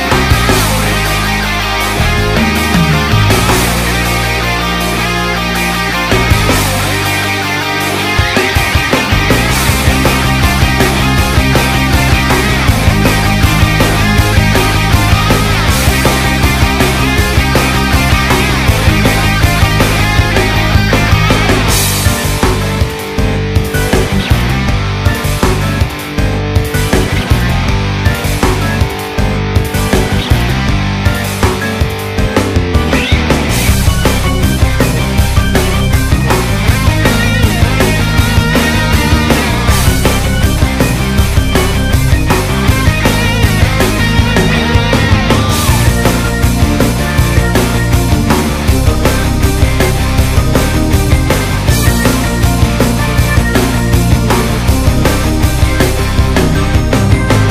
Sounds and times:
Punk rock: 0.0s - 57.5s.

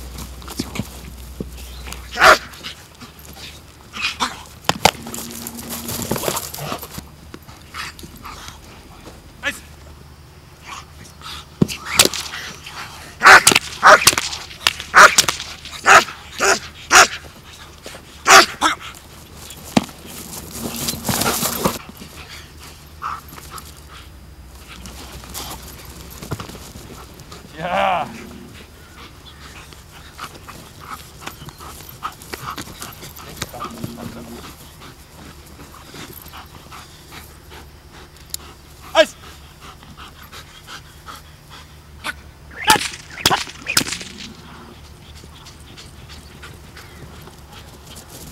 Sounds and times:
Bow-wow: 2.1s - 2.5s, 13.2s - 14.1s, 14.9s - 15.2s, 15.8s - 17.2s, 18.2s - 18.8s.

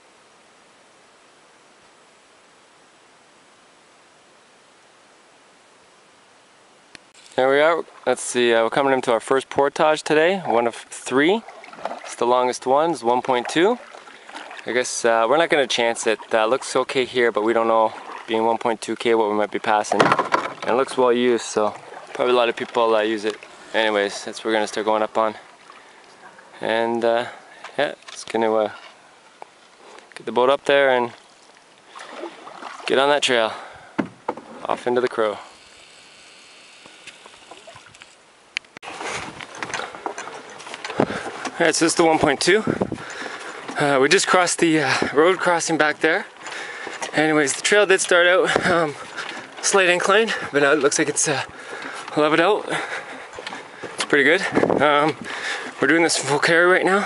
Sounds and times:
Rowboat, canoe, kayak: 0.0s - 57.0s
Speech: 7.4s - 11.4s, 12.1s - 13.8s, 14.7s - 25.4s, 26.6s - 28.8s, 30.2s - 31.2s, 32.9s - 33.6s, 34.6s - 35.6s, 41.6s - 42.8s, 43.8s - 46.3s, 47.1s - 49.0s, 49.6s - 51.5s, 52.1s - 52.9s, 54.1s - 55.2s, 55.8s - 57.0s.

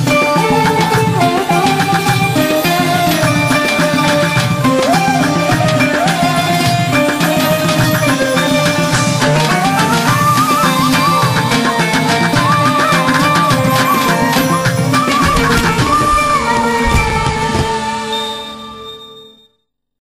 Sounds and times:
Independent music: 0.0s - 19.4s.

